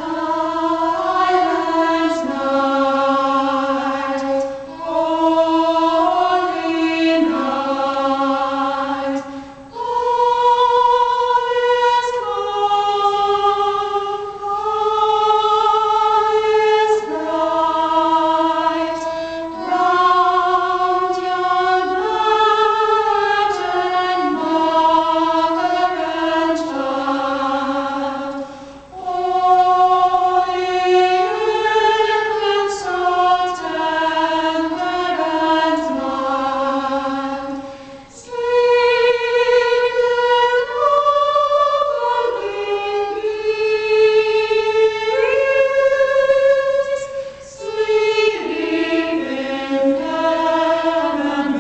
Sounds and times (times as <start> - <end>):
Female singing: 0.0 - 9.2, 29.0 - 37.5, 38.2 - 51.6
Choir: 0.0 - 51.6.